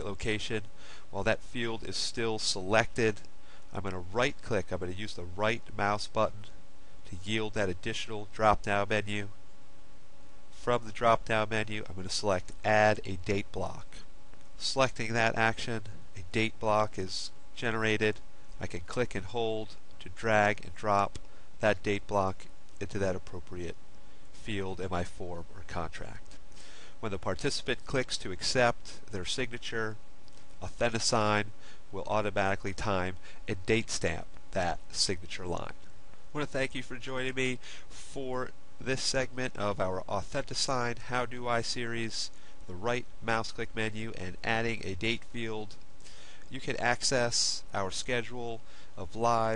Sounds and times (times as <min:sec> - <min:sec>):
Speech: 0:00.0 - 0:09.4, 0:10.6 - 0:23.8, 0:24.4 - 0:26.4, 0:27.0 - 0:30.0, 0:30.6 - 0:45.8, 0:46.5 - 0:49.5.